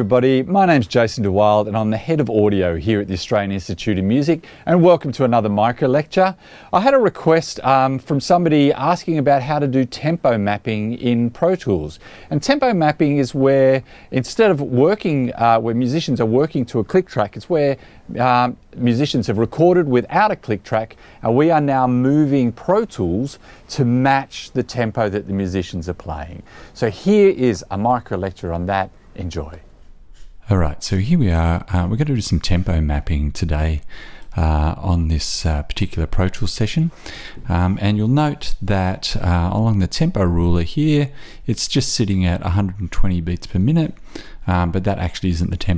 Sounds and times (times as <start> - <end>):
Speech: 0.0 - 29.7, 30.4 - 45.7.